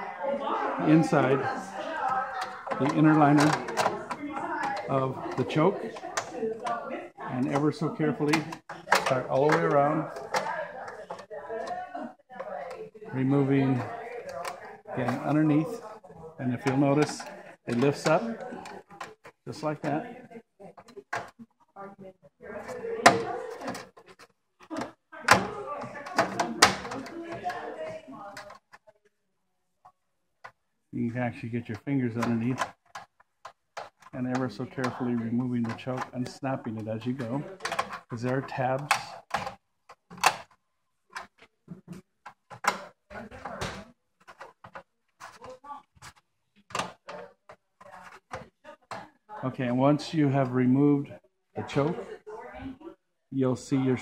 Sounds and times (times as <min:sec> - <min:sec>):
Speech: 0:34.2 - 0:39.2, 0:49.3 - 0:52.8.